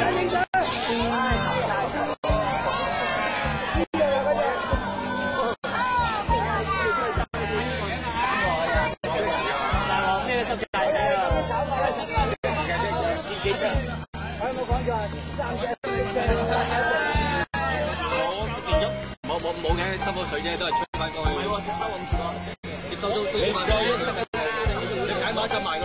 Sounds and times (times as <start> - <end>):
Music: 0.0 - 25.8
Speech: 0.0 - 25.8.